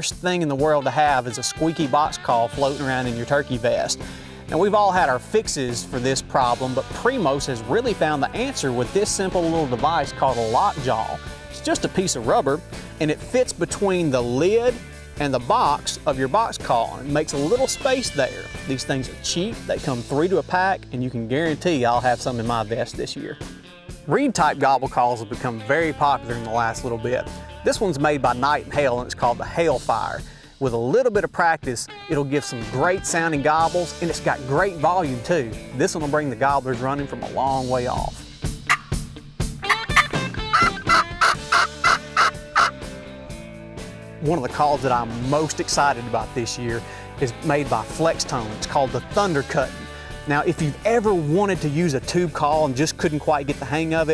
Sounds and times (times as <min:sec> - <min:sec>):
Speech: 0:00.0 - 0:23.4, 0:24.1 - 0:38.2, 0:44.2 - 0:54.1
Music: 0:00.0 - 0:54.1.